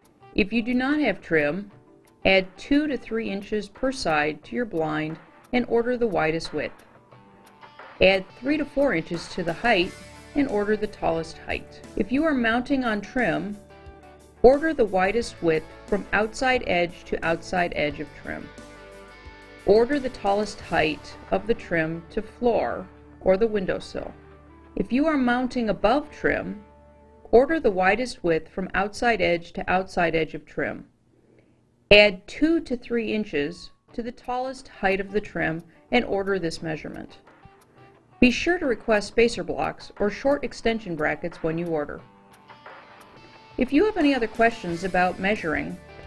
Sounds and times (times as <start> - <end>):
Music: 0.0 - 29.3, 33.0 - 46.0
Speech: 0.4 - 1.7, 2.3 - 6.8, 8.0 - 13.6, 14.5 - 18.5, 19.7 - 24.2, 24.8 - 26.6, 27.3 - 30.9, 31.9 - 37.2, 38.2 - 42.1, 43.6 - 45.8.